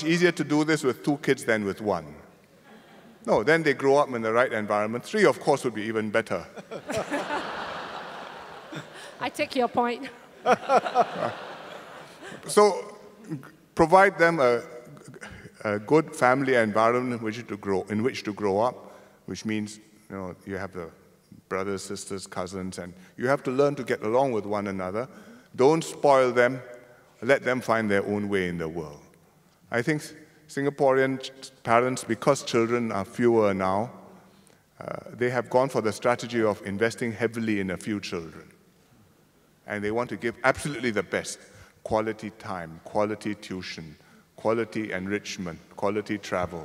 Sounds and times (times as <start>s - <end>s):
Speech: 3.3s - 6.5s, 12.5s - 26.6s, 27.2s - 29.1s, 29.7s - 33.9s, 34.8s - 38.5s, 39.7s - 46.6s.